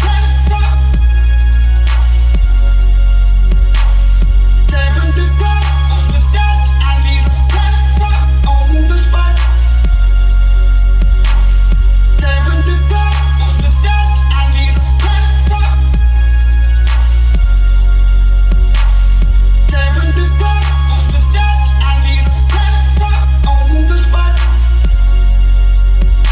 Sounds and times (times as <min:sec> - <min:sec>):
Music: 0:00.0 - 0:26.3.